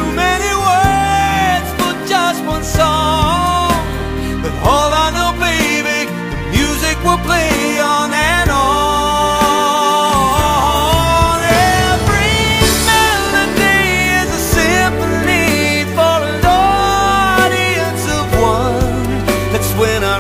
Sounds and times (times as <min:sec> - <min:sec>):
Music: 0:00.0 - 0:20.2.